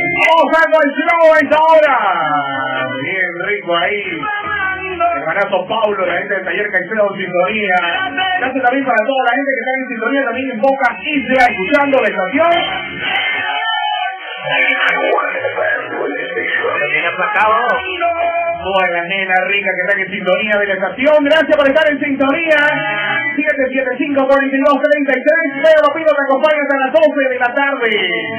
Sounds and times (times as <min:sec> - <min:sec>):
Music: 0:00.0 - 0:28.3
Speech: 0:00.2 - 0:04.3, 0:05.1 - 0:12.8, 0:14.4 - 0:18.0, 0:18.7 - 0:22.8, 0:23.4 - 0:28.3
Radio: 0:14.2 - 0:18.0.